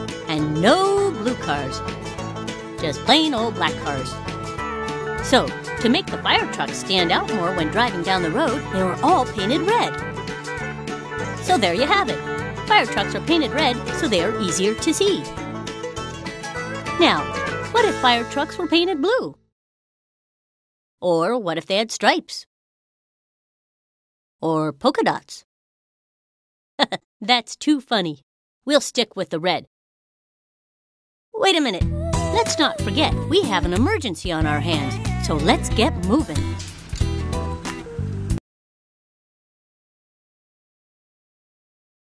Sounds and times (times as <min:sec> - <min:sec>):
Speech: 0:00.3 - 0:01.8, 0:02.8 - 0:04.2, 0:05.2 - 0:10.0, 0:11.4 - 0:15.3, 0:17.0 - 0:19.4, 0:21.0 - 0:22.5, 0:24.4 - 0:25.5, 0:26.8 - 0:29.7, 0:31.4 - 0:36.6.